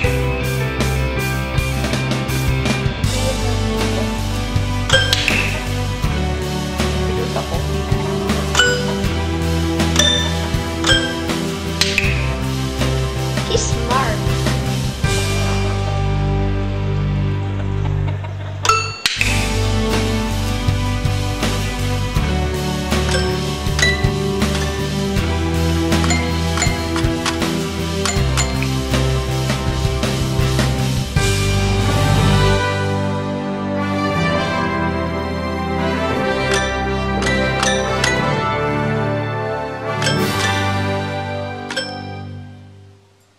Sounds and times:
Cluck: 17.5 - 18.6.

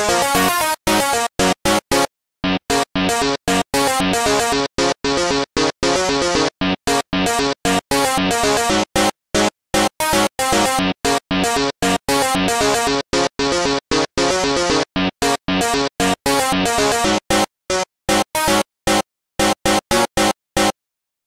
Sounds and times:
Music: 0.0 - 20.8.

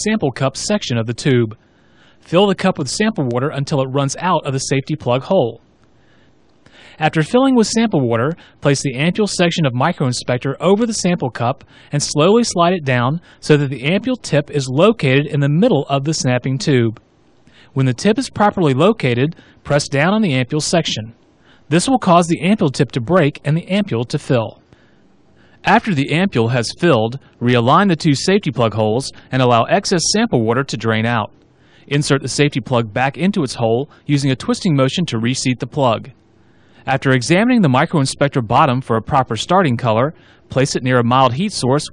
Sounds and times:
Speech: 0.0 - 1.6, 2.2 - 5.6, 7.0 - 17.0, 17.7 - 24.6, 25.6 - 31.3, 31.9 - 36.2, 36.9 - 41.9.

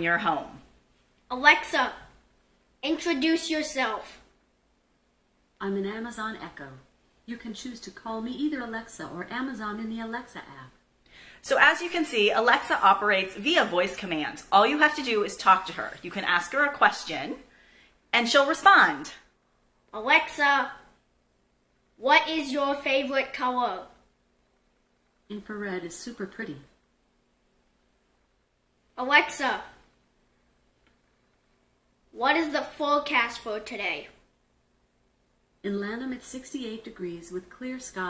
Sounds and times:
Speech: 0.0 - 0.6, 5.6 - 10.8, 11.4 - 17.4, 35.6 - 38.0.

